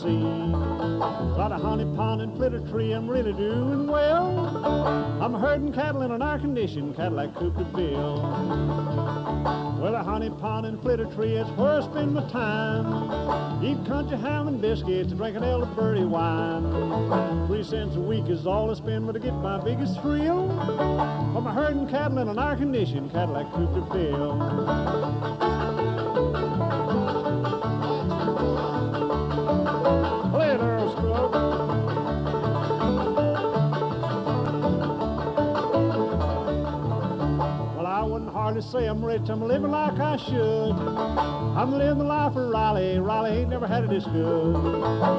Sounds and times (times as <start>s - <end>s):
Music: 0.0s - 45.1s.